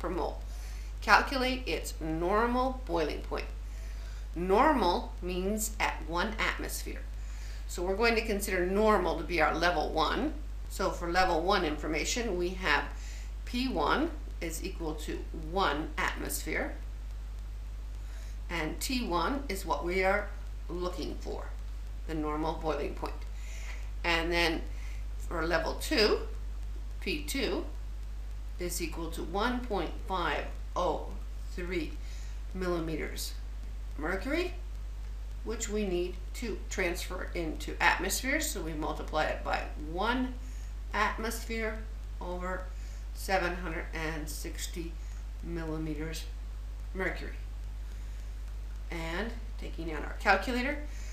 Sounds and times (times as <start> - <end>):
Speech: 0.0 - 0.4, 1.0 - 3.6, 4.4 - 7.1, 7.7 - 16.8, 18.5 - 23.3, 24.0 - 26.4, 27.0 - 27.8, 28.6 - 33.4, 34.0 - 34.6, 35.4 - 46.3, 46.9 - 47.4, 48.9 - 50.9.